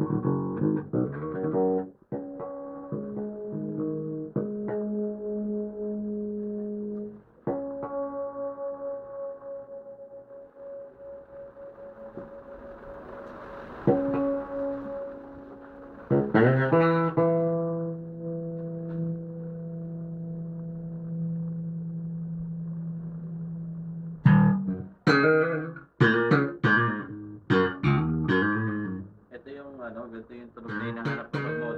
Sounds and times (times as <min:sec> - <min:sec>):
Music: 0:00.0 - 0:31.7.